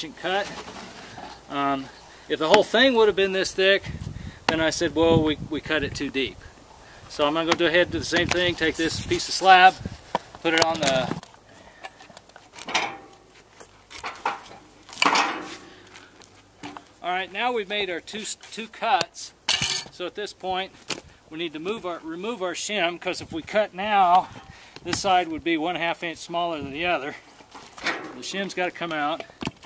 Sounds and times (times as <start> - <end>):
Speech: 0.0 - 0.6, 1.5 - 3.9, 4.5 - 6.4, 7.1 - 9.8, 10.4 - 11.2, 17.0 - 19.4, 20.0 - 20.7, 21.3 - 24.3, 24.9 - 27.2, 28.2 - 29.3.